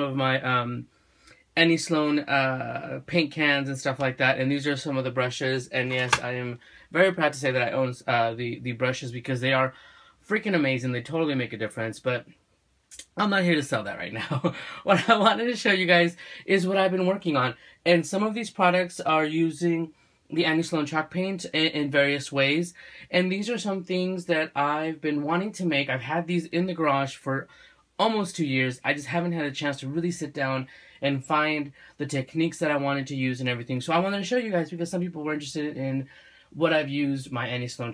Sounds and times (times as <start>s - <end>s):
Speech: 0.0s - 0.9s, 1.6s - 37.9s.